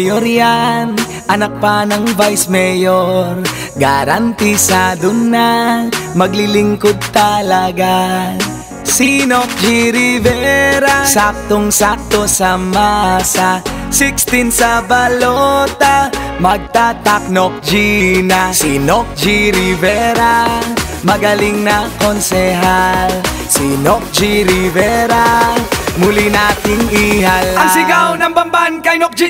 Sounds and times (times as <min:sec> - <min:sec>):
Music: 0:00.0 - 0:29.2.